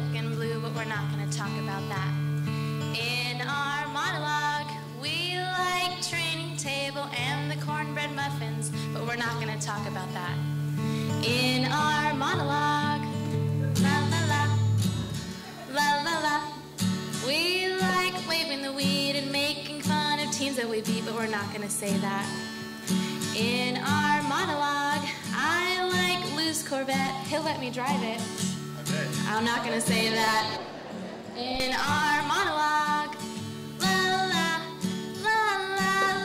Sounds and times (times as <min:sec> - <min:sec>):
Music: 0:00.0 - 0:36.2
Speech: 0:00.1 - 0:02.1, 0:28.8 - 0:30.6.